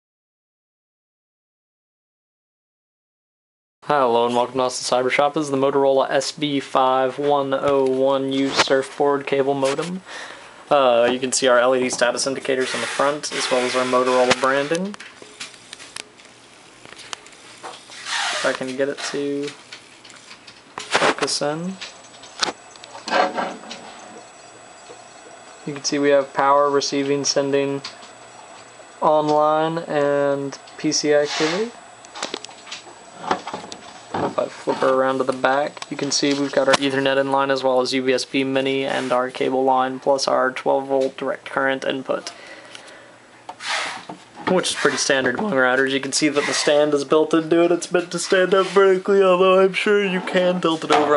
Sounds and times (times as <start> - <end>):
Speech: 3.9 - 10.0, 10.7 - 15.0, 18.4 - 19.6, 21.1 - 21.8, 25.7 - 27.9, 29.0 - 31.8, 34.4 - 42.3, 44.4 - 51.1.